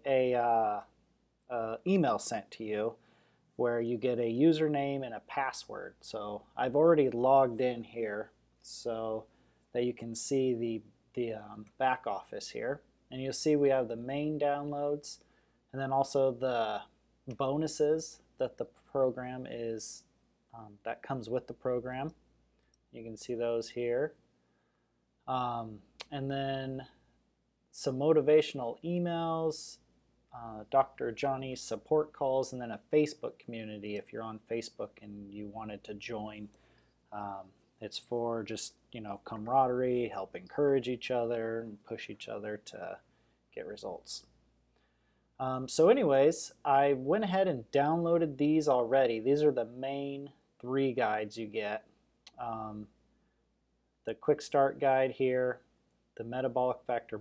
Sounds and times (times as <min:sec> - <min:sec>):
Speech: 0:00.0 - 0:03.0, 0:03.6 - 0:22.2, 0:22.9 - 0:24.2, 0:25.2 - 0:27.1, 0:27.7 - 0:44.4, 0:45.4 - 0:53.0, 0:54.0 - 0:57.2.